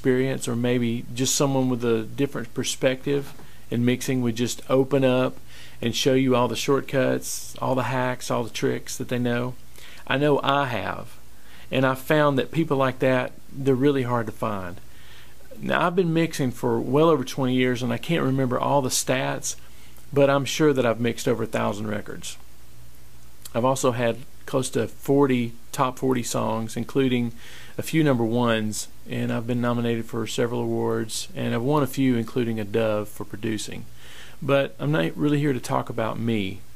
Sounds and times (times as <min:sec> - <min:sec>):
Speech: 0:00.0 - 0:14.8, 0:15.5 - 0:22.4, 0:23.5 - 0:36.7.